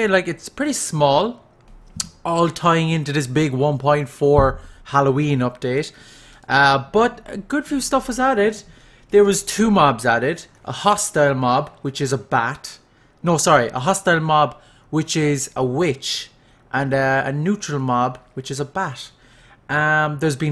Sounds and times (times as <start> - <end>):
Speech: 0.0 - 1.4, 2.0 - 20.5.